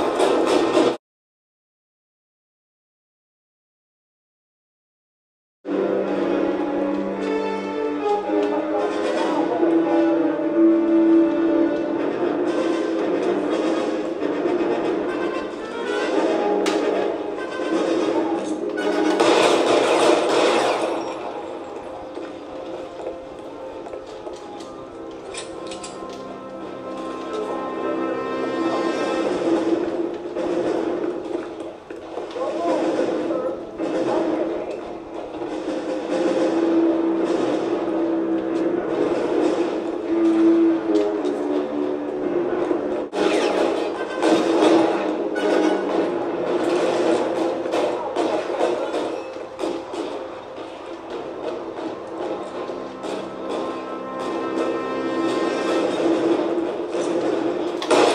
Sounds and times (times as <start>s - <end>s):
Music: 0.0s - 1.0s, 5.7s - 58.1s.